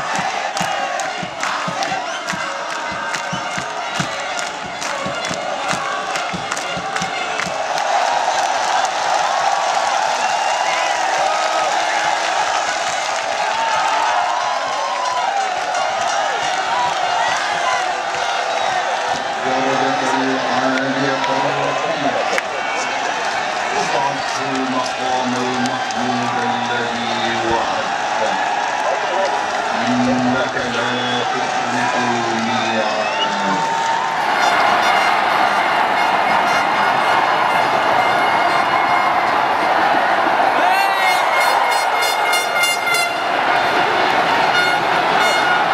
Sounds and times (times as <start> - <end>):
Speech: 19.4 - 23.0, 23.7 - 33.7.